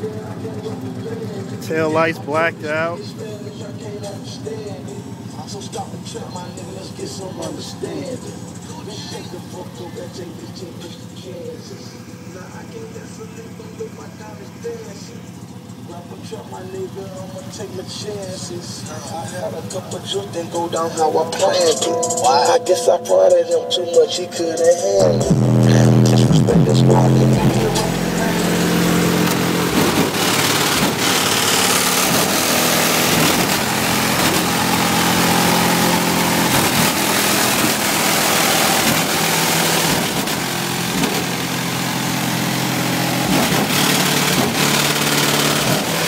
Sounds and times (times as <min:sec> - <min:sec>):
Car: 0:00.0 - 0:46.0
Music: 0:18.8 - 0:28.7.